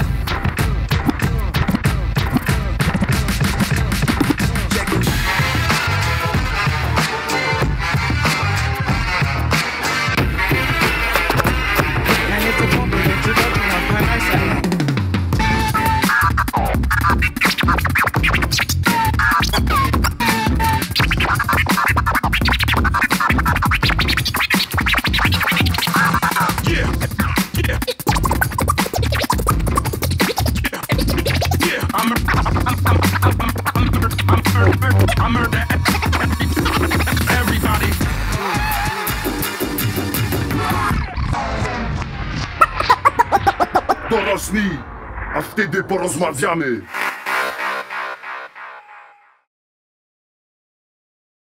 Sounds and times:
Scratching (performance technique): 0.0 - 49.0.

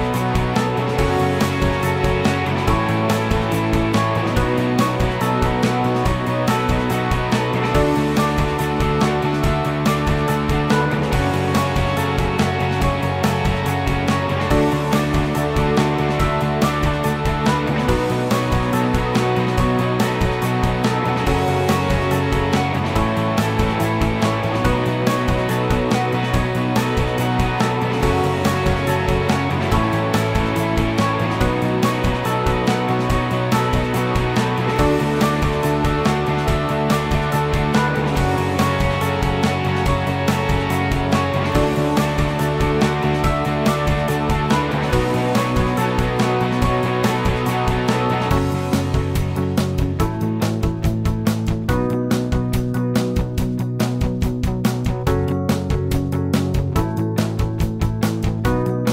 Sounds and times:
Music: 0.0 - 58.9.

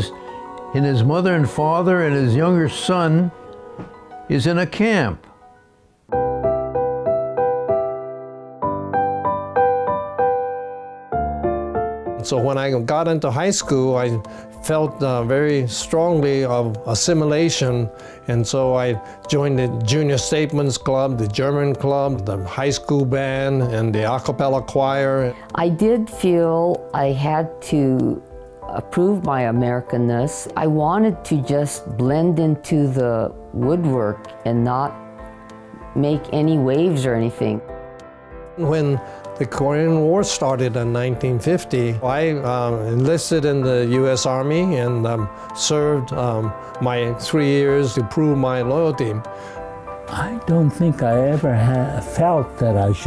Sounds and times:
Electric piano: 5.0 - 23.6.

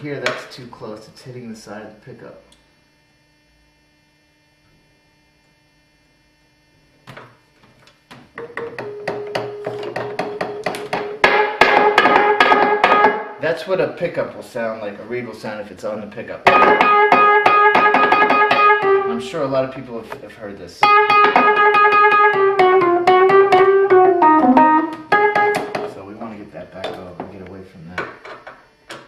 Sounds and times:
Speech: 0.0 - 2.6, 13.4 - 16.5, 19.1 - 20.8, 25.8 - 28.2
Electric piano: 16.5 - 19.4, 20.8 - 25.9.

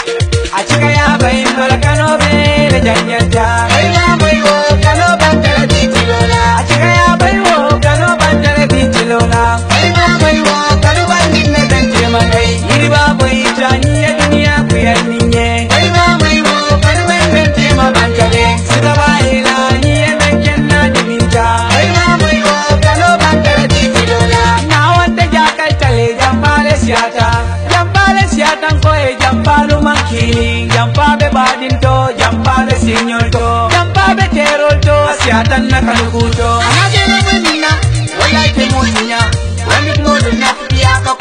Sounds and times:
Music: 0.0 - 41.2.

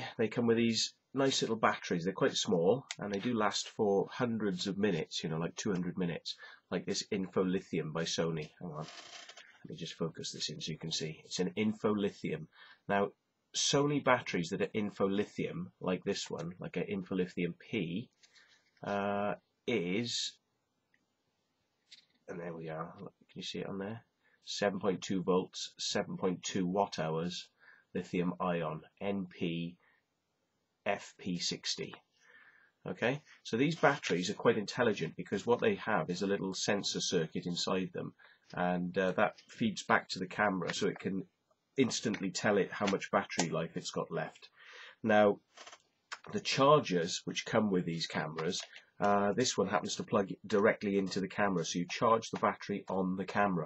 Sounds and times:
Speech: 0.0 - 9.0, 9.7 - 18.1, 18.8 - 20.4, 22.3 - 29.8, 30.9 - 32.1, 32.8 - 45.5, 46.2 - 53.6.

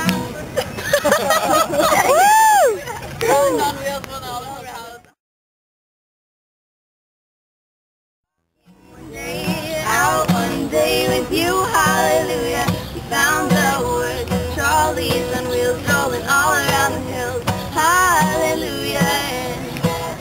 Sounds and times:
Music: 8.6 - 20.2.

